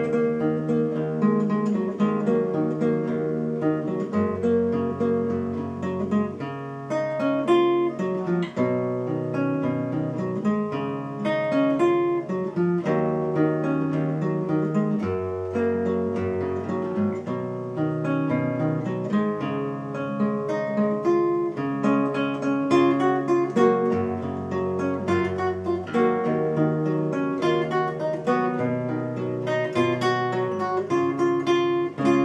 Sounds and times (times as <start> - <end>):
Acoustic guitar: 0.0 - 32.2
Electric guitar: 0.0 - 32.2
Strum: 0.0 - 32.2.